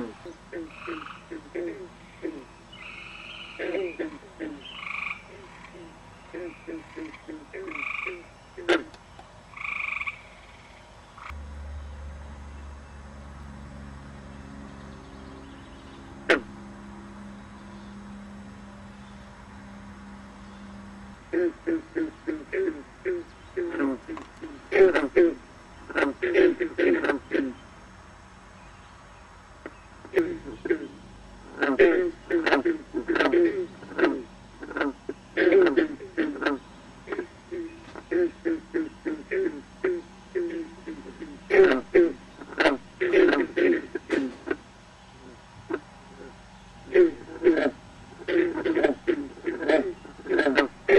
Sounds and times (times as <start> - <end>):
Frog: 0.0 - 8.9, 9.5 - 11.4, 21.3 - 27.6, 29.6 - 44.6, 45.2 - 50.9.